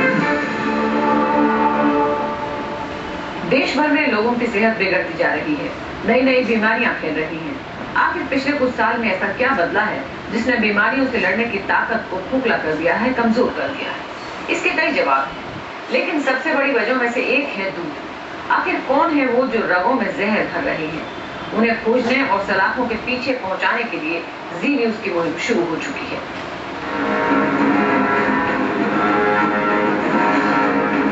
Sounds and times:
Speech: 3.4 - 26.3.

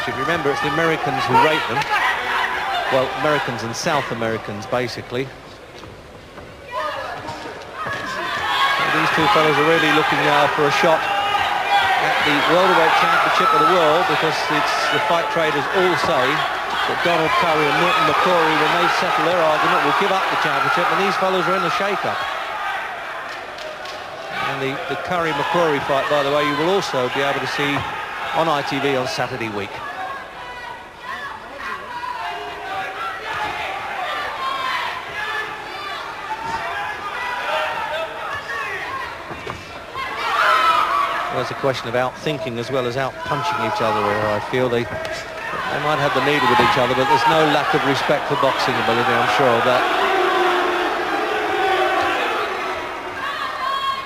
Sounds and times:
Speech: 0.0 - 2.0, 2.9 - 5.3, 8.8 - 11.0, 12.0 - 22.2, 24.4 - 29.8, 41.3 - 49.9.

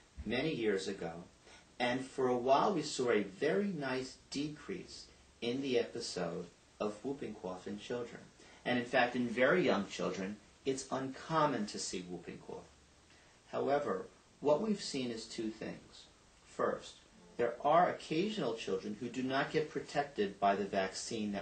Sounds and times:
Speech: 0.2 - 12.7, 13.5 - 21.4.

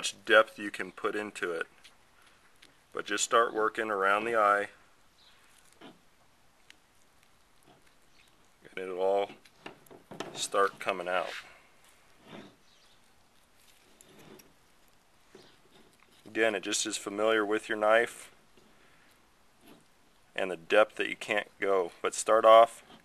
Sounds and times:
Speech: 0.0 - 1.7, 3.0 - 4.8, 8.7 - 9.4, 10.4 - 11.5, 16.3 - 18.3, 20.4 - 22.8.

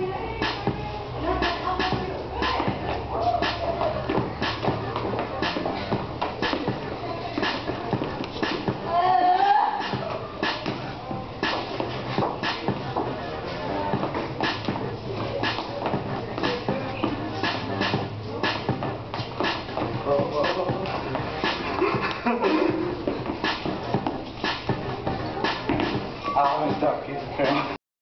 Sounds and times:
Music: 0.0 - 27.8
Speech: 26.2 - 27.8.

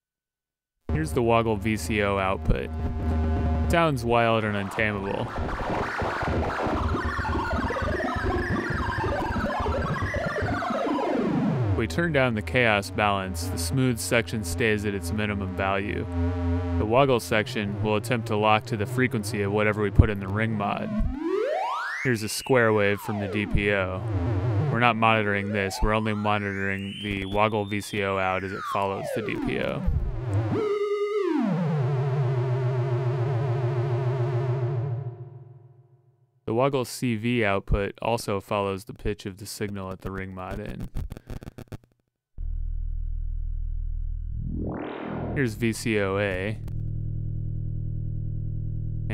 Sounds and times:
Speech: 0.9 - 2.7, 3.7 - 5.3, 11.8 - 16.1, 16.8 - 21.0, 22.1 - 24.1, 24.7 - 30.0, 36.5 - 40.8, 45.4 - 46.6
Music: 4.8 - 22.2, 22.8 - 35.9.

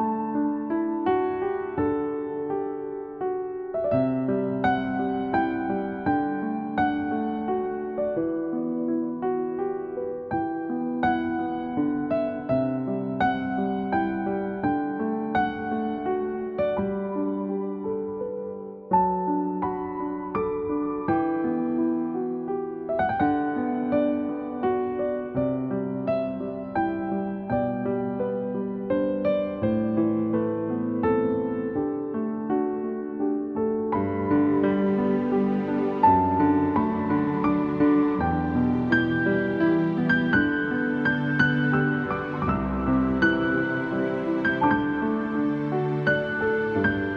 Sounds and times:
Music: 0.0 - 47.1.

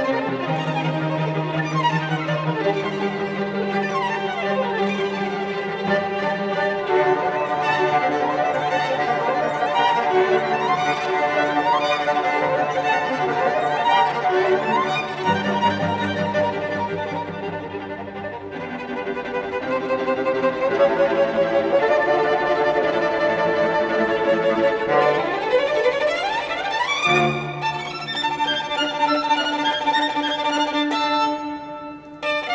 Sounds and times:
Violin, fiddle: 0.0 - 32.5.

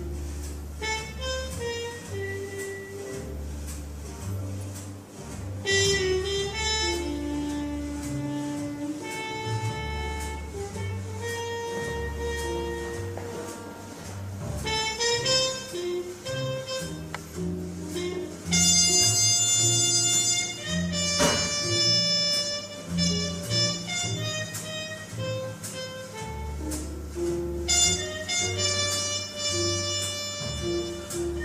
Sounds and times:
Wind instrument, woodwind instrument: 0.0 - 31.4.

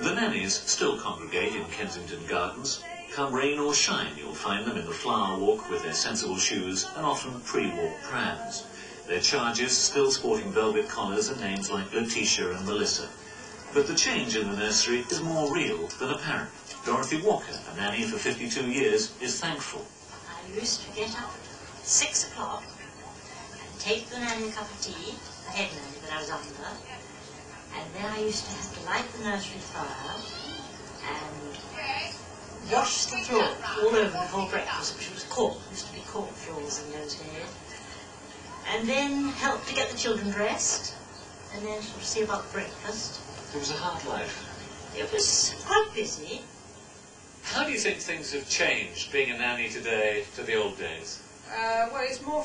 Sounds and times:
Television: 0.0 - 52.4.

